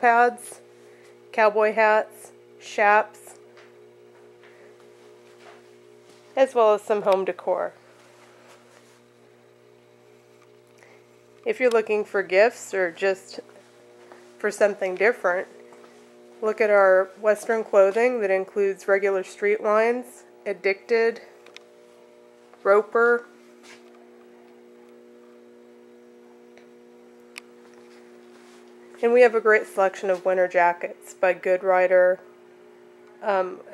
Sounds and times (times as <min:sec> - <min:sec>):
Speech: 0:00.0 - 0:00.6, 0:01.4 - 0:03.4, 0:06.4 - 0:07.8, 0:11.5 - 0:13.5, 0:14.4 - 0:15.5, 0:16.4 - 0:21.3, 0:22.6 - 0:23.3, 0:29.0 - 0:32.2, 0:33.2 - 0:33.7.